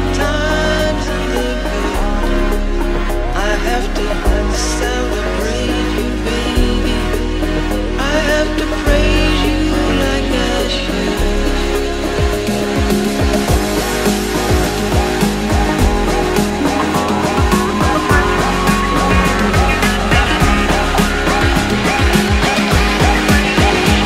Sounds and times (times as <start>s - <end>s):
Electronic dance music: 0.0s - 24.0s.